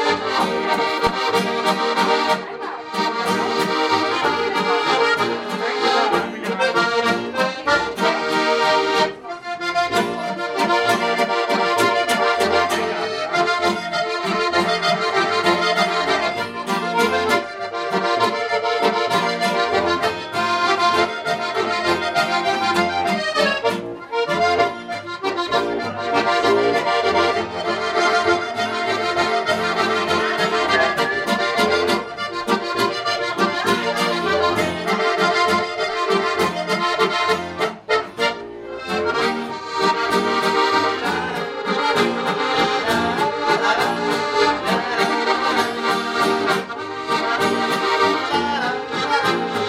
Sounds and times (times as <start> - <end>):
Accordion: 0.0 - 49.6.